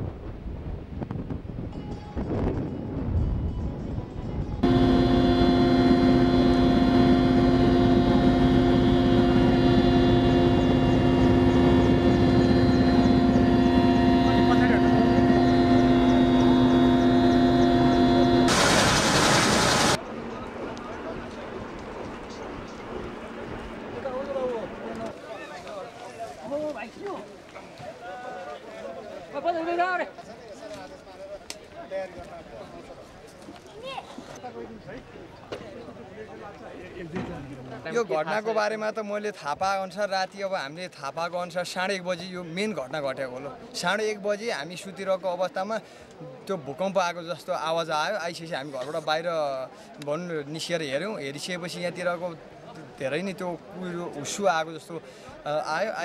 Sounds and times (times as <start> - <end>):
Speech: 23.9 - 56.0.